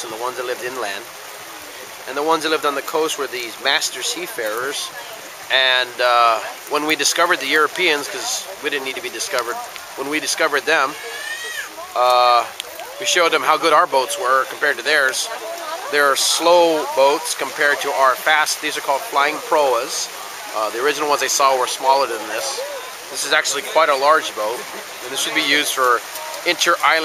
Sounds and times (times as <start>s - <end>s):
Speech: 0.0s - 1.1s, 2.1s - 27.0s.